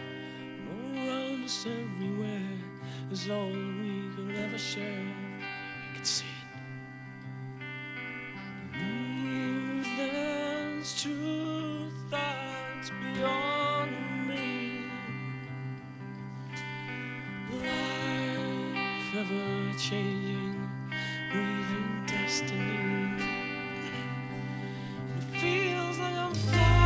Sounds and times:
Music: 0:00.0 - 0:26.8.

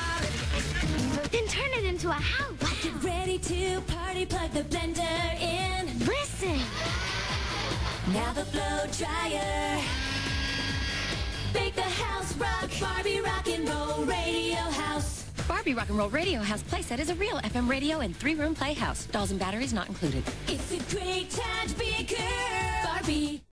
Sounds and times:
Music: 0:00.0 - 0:23.5
Speech: 0:15.4 - 0:20.3.

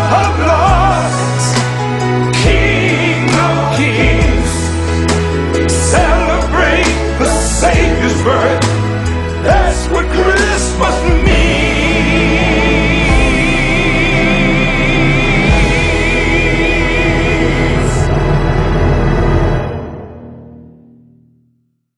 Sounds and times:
Singing: 0:00.0 - 0:04.7, 0:09.4 - 0:18.1
Music: 0:00.0 - 0:21.9.

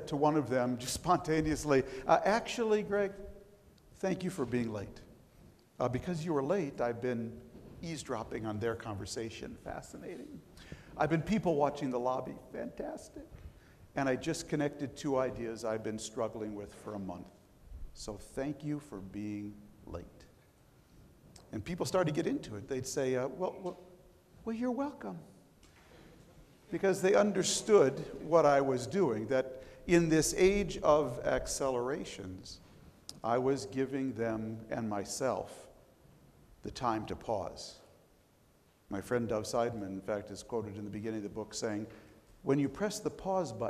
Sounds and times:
Male speech, man speaking: 0:00.0 - 0:03.3, 0:04.0 - 0:05.1, 0:05.8 - 0:10.4, 0:11.0 - 0:13.3, 0:14.0 - 0:17.4, 0:18.0 - 0:20.3, 0:21.5 - 0:23.8, 0:24.4 - 0:25.3, 0:26.7 - 0:35.7, 0:36.6 - 0:37.9, 0:38.9 - 0:43.7
Narration, monologue: 0:00.0 - 0:43.7.

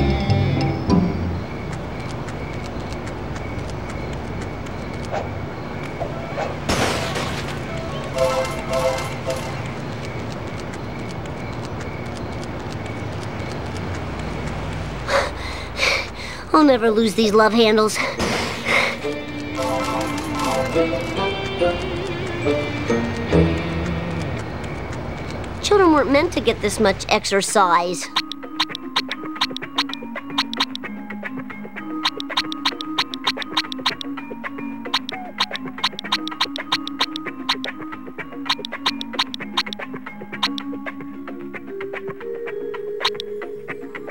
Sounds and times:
Speech: 0:16.5 - 0:18.1, 0:25.6 - 0:28.1.

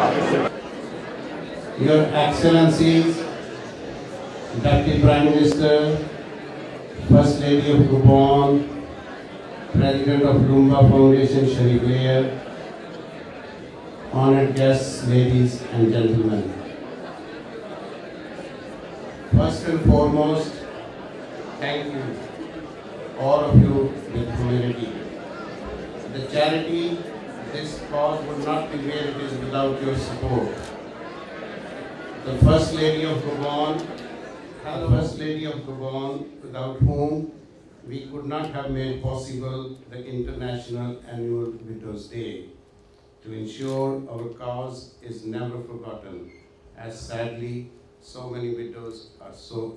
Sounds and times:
Narration, monologue: 0:01.7 - 0:03.4, 0:04.5 - 0:06.2, 0:07.0 - 0:08.9, 0:09.7 - 0:12.4, 0:14.0 - 0:16.7, 0:32.2 - 0:49.7
Male speech, man speaking: 0:01.8 - 0:03.3, 0:04.5 - 0:06.2, 0:07.0 - 0:08.8, 0:09.7 - 0:12.4, 0:14.1 - 0:16.6, 0:19.3 - 0:20.6, 0:21.6 - 0:22.2, 0:23.2 - 0:25.0, 0:26.1 - 0:30.7, 0:32.2 - 0:33.9, 0:34.6 - 0:42.6, 0:43.2 - 0:49.7.

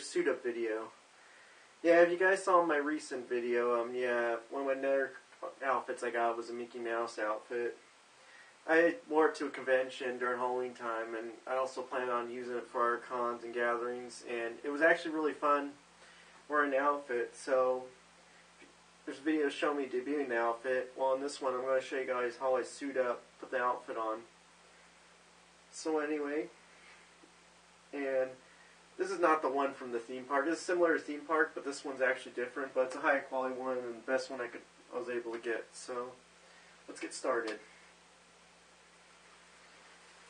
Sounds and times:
Speech: 0:00.0 - 0:01.0, 0:01.8 - 0:07.8, 0:08.6 - 0:15.8, 0:16.5 - 0:18.0, 0:19.1 - 0:24.4, 0:25.7 - 0:26.6, 0:27.9 - 0:36.2, 0:36.9 - 0:37.7.

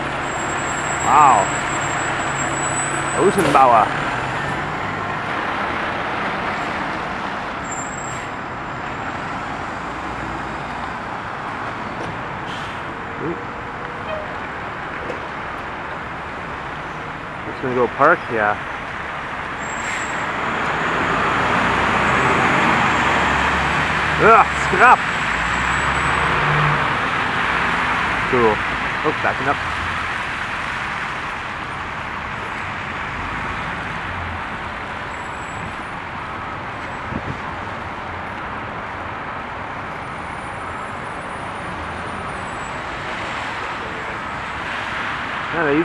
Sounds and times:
Truck: 0:00.0 - 0:45.8.

